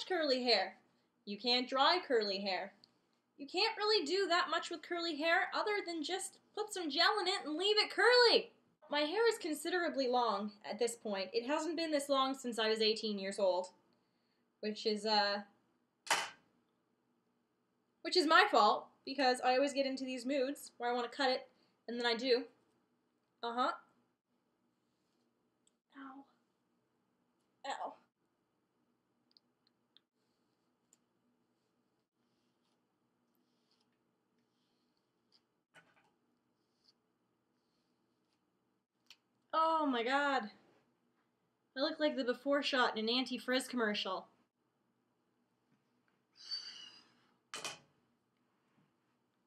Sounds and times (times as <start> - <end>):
Speech: 0.0 - 2.8, 3.4 - 13.7, 14.6 - 15.5, 18.1 - 22.5, 23.4 - 23.8, 27.7 - 28.0, 39.6 - 40.6, 41.8 - 44.3.